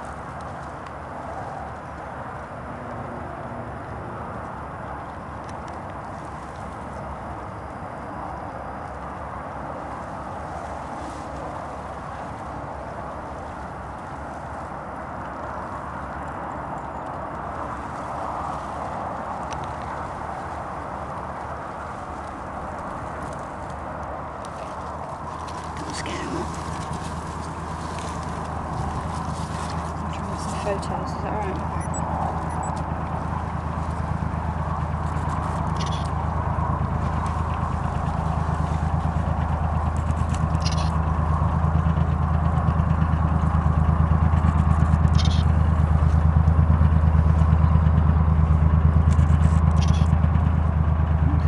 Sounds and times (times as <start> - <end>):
Speech: 25.9 - 26.5, 30.2 - 31.8.